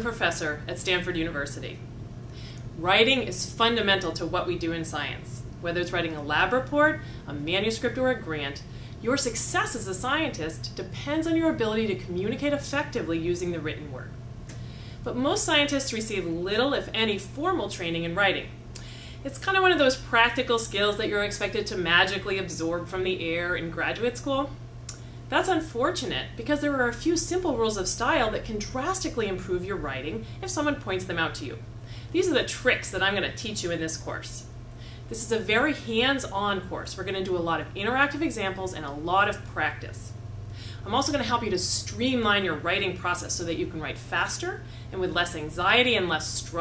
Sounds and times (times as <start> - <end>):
Speech: 0.0 - 1.8, 2.8 - 14.1, 15.0 - 18.6, 19.3 - 24.6, 25.3 - 31.6, 32.2 - 34.5, 35.1 - 40.1, 40.8 - 46.6.